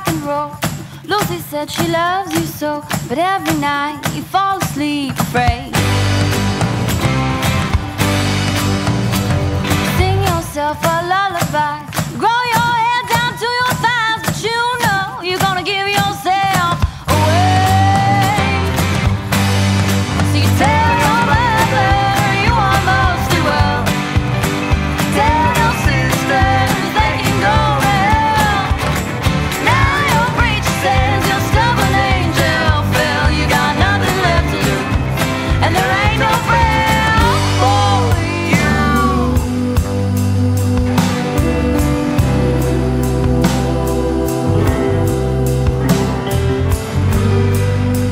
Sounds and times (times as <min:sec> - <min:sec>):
Rhythm and blues: 0:00.0 - 0:48.1.